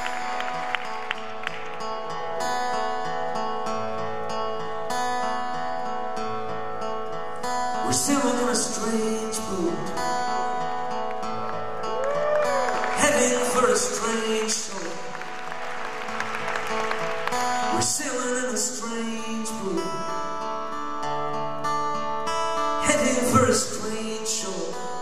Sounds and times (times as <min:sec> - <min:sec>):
Music: 0:00.0 - 0:25.0.